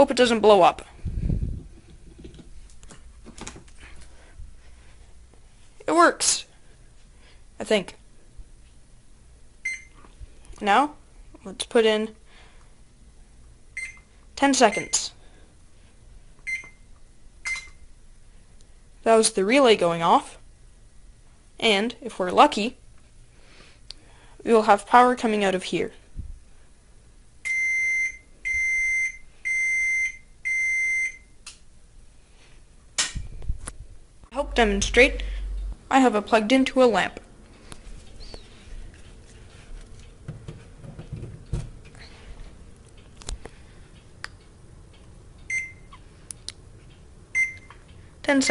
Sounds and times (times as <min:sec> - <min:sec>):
Speech: 0:00.0 - 0:00.9, 0:05.8 - 0:06.5, 0:07.6 - 0:08.0, 0:10.6 - 0:12.2, 0:14.4 - 0:15.2, 0:19.0 - 0:20.4, 0:21.6 - 0:22.8, 0:24.4 - 0:26.0, 0:34.3 - 0:35.3, 0:35.9 - 0:37.2, 0:48.2 - 0:48.5
Beep, bleep: 0:09.7 - 0:09.9, 0:13.8 - 0:14.1, 0:14.7 - 0:15.0, 0:16.5 - 0:16.8, 0:17.4 - 0:17.8, 0:27.5 - 0:31.3, 0:45.5 - 0:45.9, 0:47.4 - 0:47.7
Alarm: 0:27.5 - 0:31.3.